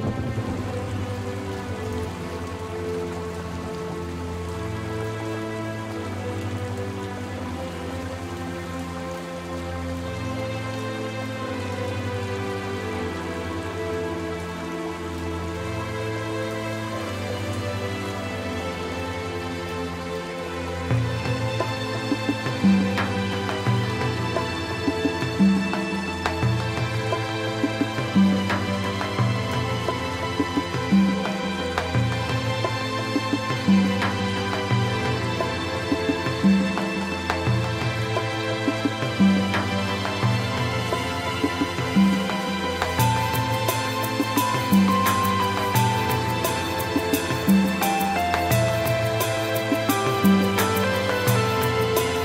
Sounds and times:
Rain on surface: 0.0s - 52.2s.

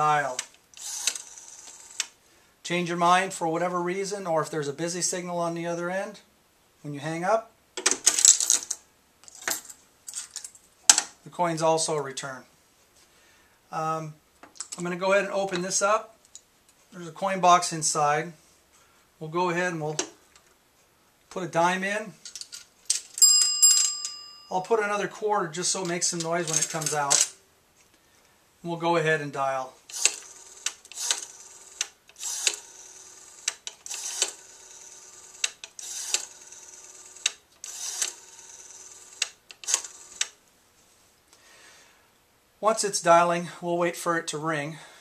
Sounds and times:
Speech: 0.0s - 0.4s, 2.6s - 7.5s, 11.2s - 12.5s, 13.7s - 14.2s, 14.8s - 16.2s, 16.9s - 18.4s, 19.2s - 20.1s, 21.3s - 22.2s, 24.5s - 27.3s, 28.6s - 29.8s, 42.6s - 44.9s
Telephone: 0.8s - 2.1s, 29.9s - 40.4s.

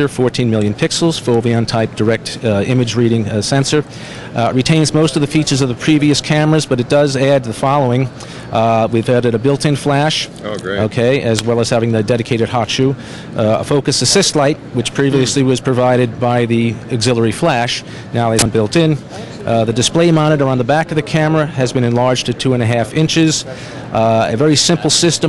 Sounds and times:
Speech: 0.0s - 25.2s.

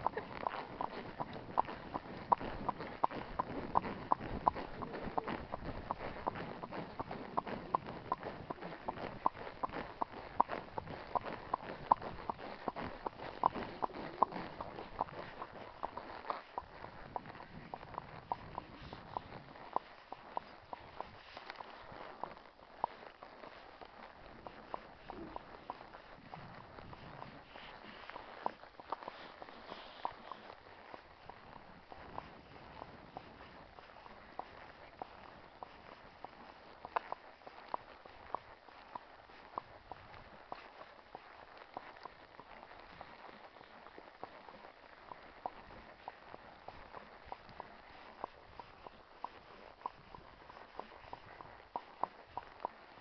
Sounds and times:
Clip-clop: 0.0s - 53.0s.

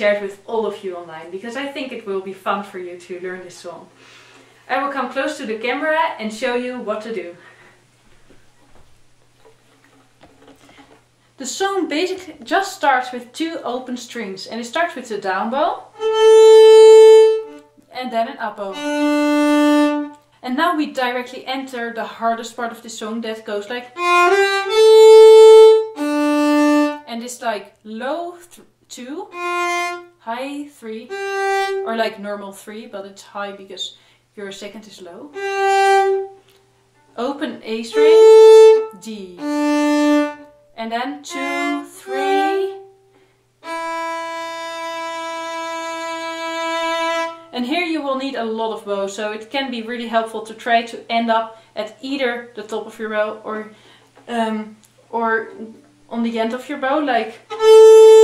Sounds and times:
Speech: 0.0s - 3.9s, 4.7s - 7.4s, 11.4s - 15.9s, 17.9s - 18.8s, 20.4s - 24.0s, 27.1s - 29.4s, 30.2s - 31.2s, 31.8s - 35.4s, 37.2s - 39.4s, 40.8s - 42.8s, 47.5s - 57.5s.

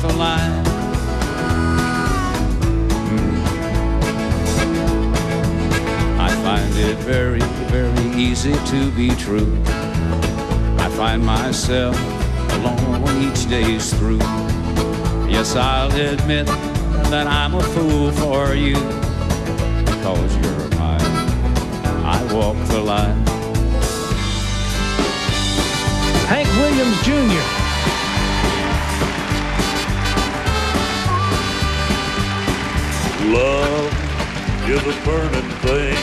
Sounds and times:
Music: 0.0s - 36.0s.

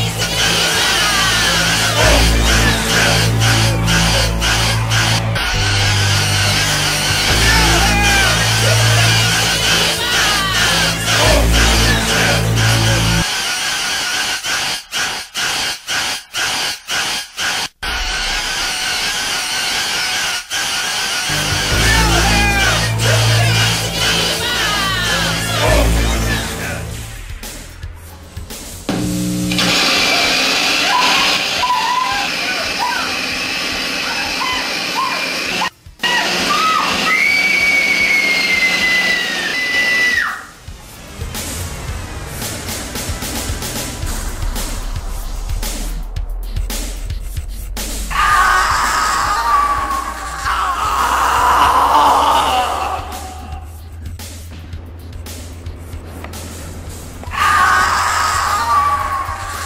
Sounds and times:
Music: 0.0s - 59.6s.

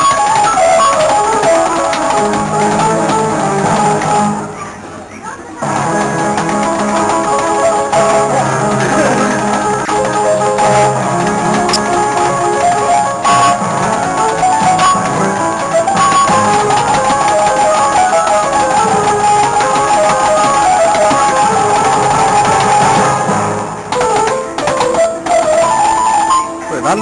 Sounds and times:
Guitar: 5.6s - 27.0s.

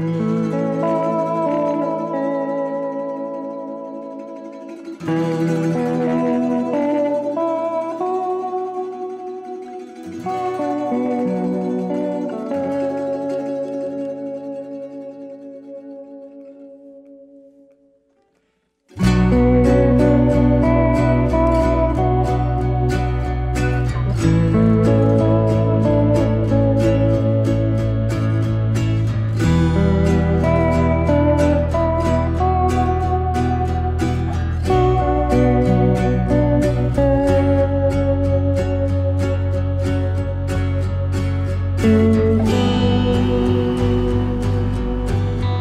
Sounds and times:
Zither: 0.0s - 16.8s, 18.9s - 45.6s.

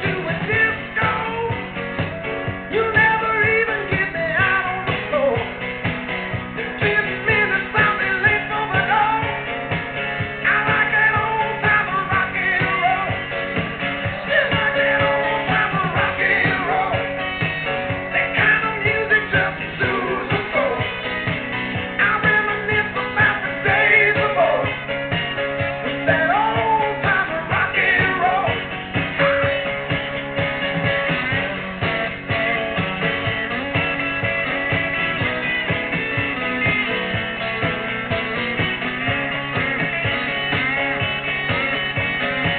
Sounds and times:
Music: 0.0s - 42.5s.

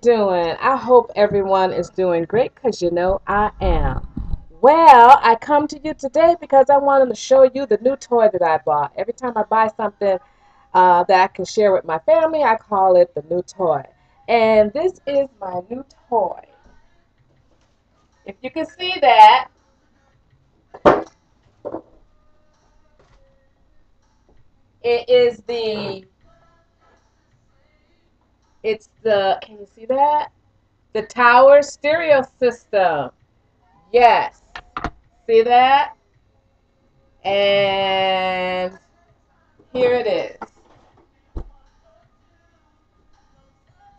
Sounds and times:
Speech: 0.0s - 4.0s, 4.6s - 10.2s, 10.8s - 16.6s, 18.3s - 19.5s, 24.9s - 26.0s, 28.7s - 30.3s, 31.0s - 33.1s, 33.9s - 34.3s, 35.3s - 36.0s, 37.3s - 38.8s, 39.7s - 40.4s.

